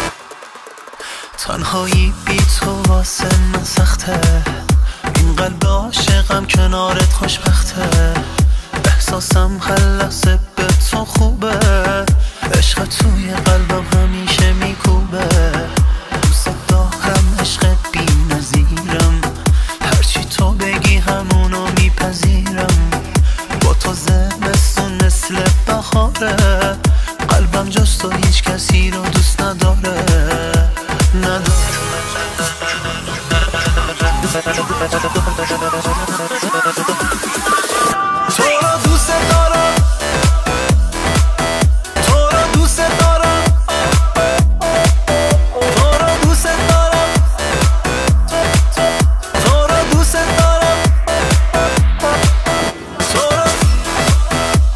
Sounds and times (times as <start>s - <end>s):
Rhythm and blues: 0.0s - 54.7s.